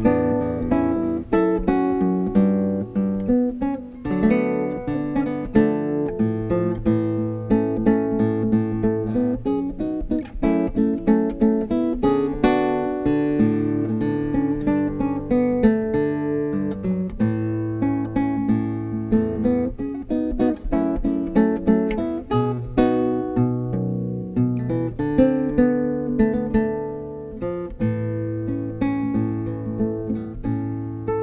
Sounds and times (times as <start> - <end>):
Acoustic guitar: 0.0 - 31.2.